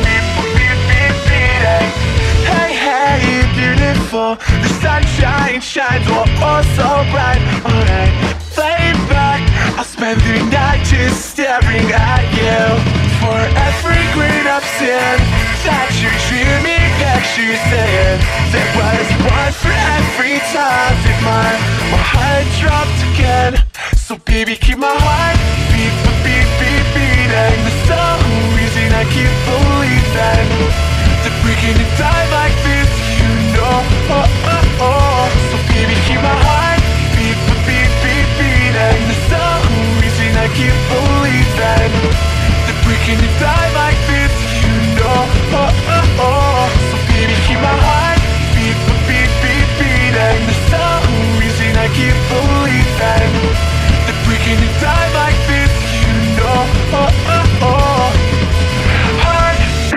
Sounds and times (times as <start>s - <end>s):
Music: 0.0s - 59.9s.